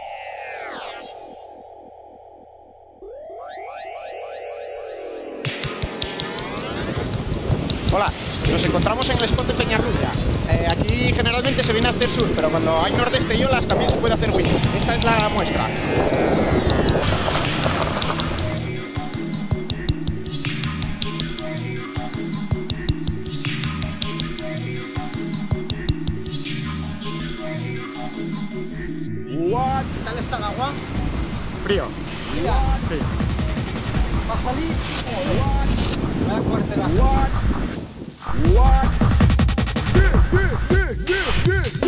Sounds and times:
Music: 0:05.4 - 0:41.8
Speech: 0:07.9 - 0:15.8, 0:29.3 - 0:30.8, 0:34.3 - 0:37.4, 0:38.3 - 0:39.0.

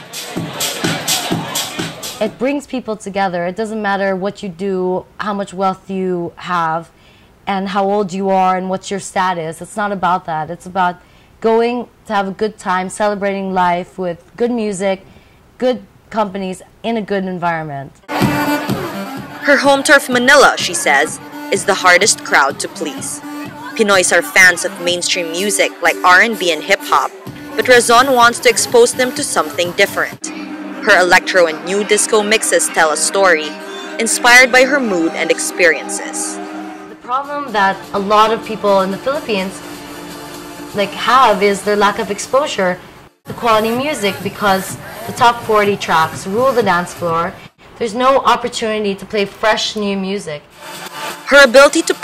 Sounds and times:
Speech: 0:02.2 - 0:06.9, 0:07.5 - 0:15.0, 0:15.6 - 0:17.9, 0:19.5 - 0:36.4, 0:37.1 - 0:39.5, 0:40.8 - 0:50.4, 0:51.3 - 0:52.0.

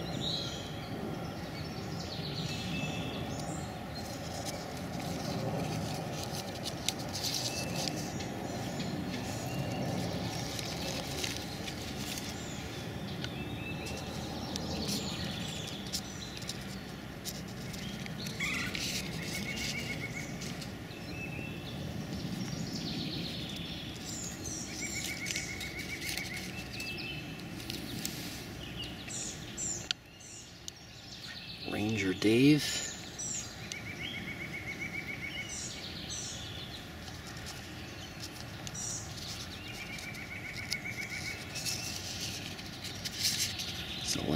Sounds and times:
Patter: 0:02.3 - 0:44.3.

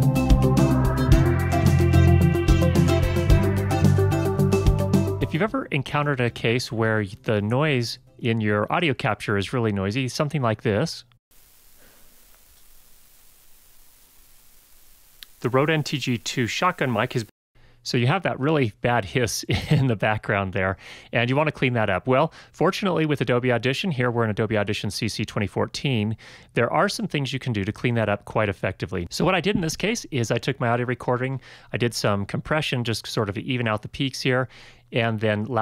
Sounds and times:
Speech: 0:05.2 - 0:11.1, 0:15.4 - 0:35.6.

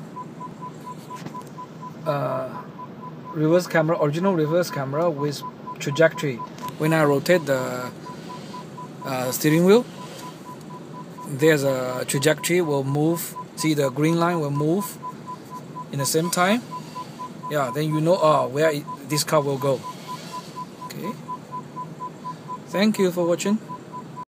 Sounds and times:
Speech: 0:02.1 - 0:02.6, 0:03.4 - 0:07.9, 0:09.1 - 0:09.9, 0:11.3 - 0:15.0, 0:15.9 - 0:16.6, 0:17.5 - 0:19.8, 0:20.9 - 0:21.2, 0:22.7 - 0:23.6.

